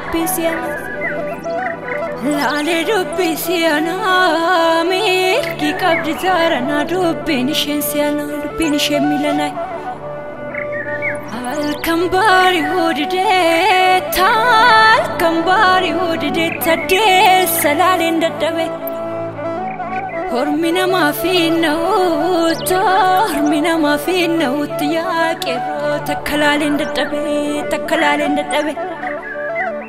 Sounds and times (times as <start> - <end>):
Music: 0.0 - 29.8.